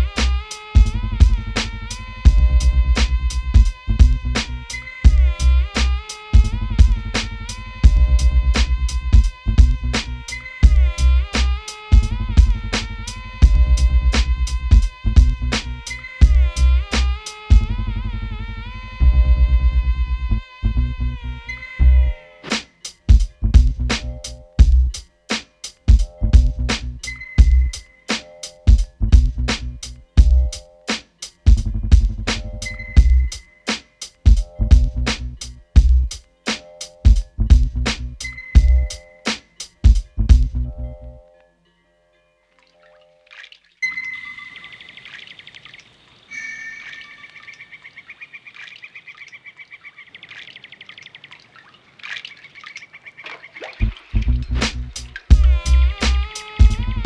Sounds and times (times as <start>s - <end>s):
Music: 0.0s - 45.0s, 53.8s - 57.0s.